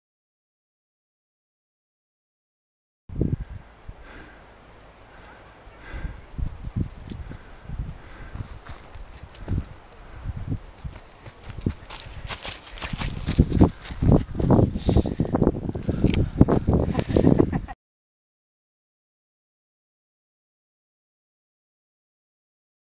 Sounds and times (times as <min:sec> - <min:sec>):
Outside, rural or natural: 0:03.1 - 0:17.8.